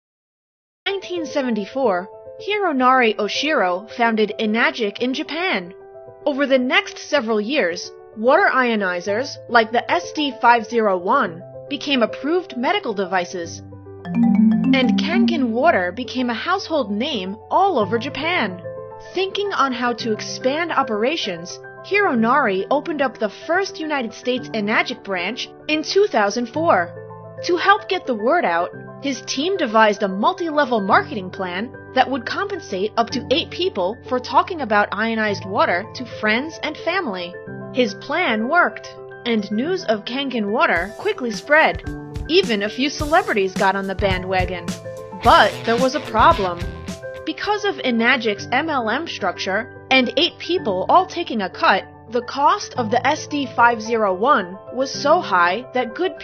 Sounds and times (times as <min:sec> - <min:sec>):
Speech: 0:00.9 - 0:05.7, 0:06.3 - 0:13.6, 0:14.2 - 0:56.2
Music: 0:00.9 - 0:56.2.